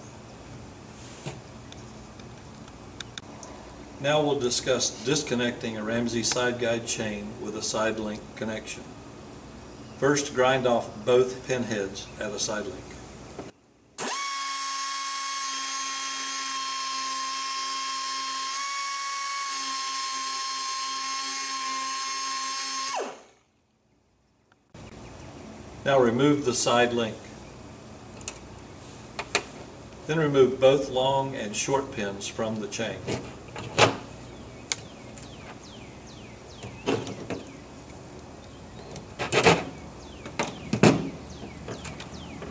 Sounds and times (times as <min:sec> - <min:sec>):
Speech: 0:04.0 - 0:08.9, 0:10.0 - 0:12.9, 0:25.8 - 0:27.3, 0:30.1 - 0:33.2
Dental drill, dentist's drill: 0:14.0 - 0:23.3.